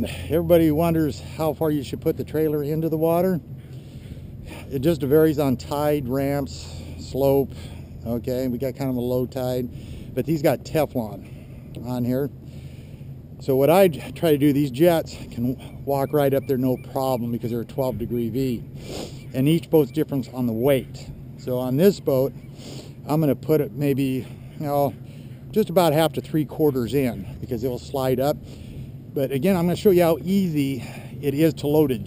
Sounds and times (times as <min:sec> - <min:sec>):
Speech: 0:00.0 - 0:03.4, 0:04.5 - 0:11.2, 0:11.8 - 0:12.3, 0:13.4 - 0:18.6, 0:19.4 - 0:22.3, 0:23.1 - 0:28.4, 0:29.2 - 0:32.0.